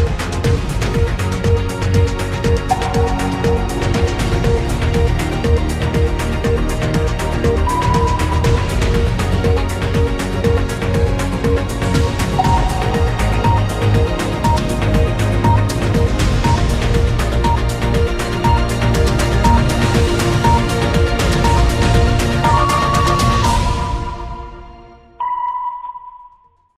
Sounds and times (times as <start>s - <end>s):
Music: 0.0s - 26.7s.